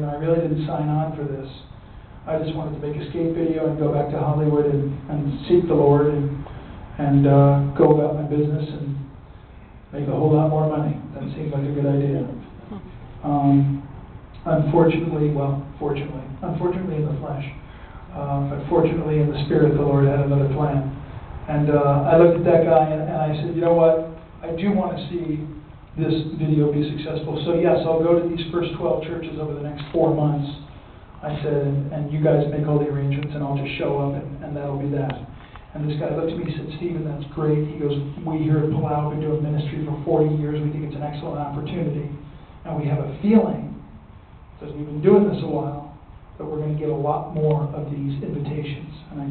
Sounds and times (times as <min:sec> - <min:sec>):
Male speech, man speaking: 0:00.0 - 0:01.7, 0:02.3 - 0:06.4, 0:07.0 - 0:09.1, 0:10.0 - 0:12.5, 0:13.2 - 0:13.8, 0:14.4 - 0:17.6, 0:18.2 - 0:43.8, 0:44.6 - 0:49.3
Narration, monologue: 0:00.0 - 0:49.3.